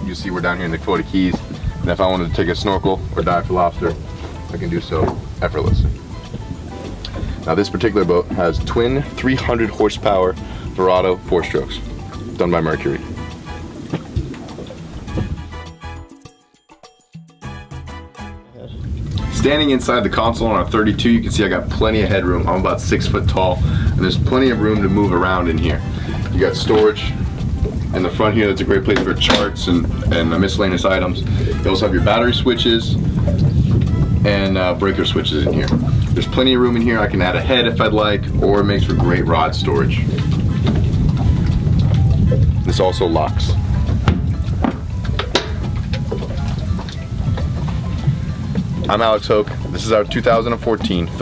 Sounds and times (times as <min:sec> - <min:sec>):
Speech: 0:00.0 - 0:05.9, 0:07.4 - 0:11.8, 0:12.4 - 0:13.0, 0:18.5 - 0:27.2, 0:28.0 - 0:33.0, 0:34.2 - 0:40.1, 0:42.7 - 0:43.6, 0:48.9 - 0:51.2
Music: 0:00.0 - 0:51.2.